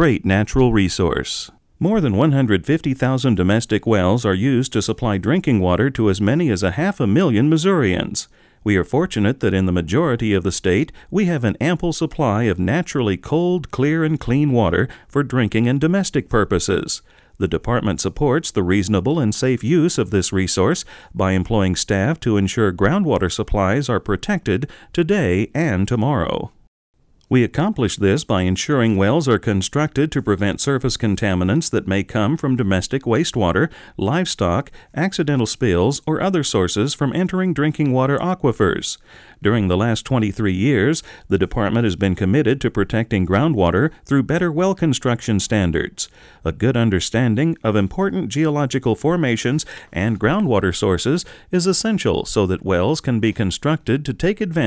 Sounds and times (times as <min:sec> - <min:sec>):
Speech: 0:00.0 - 0:26.6, 0:27.3 - 0:54.6.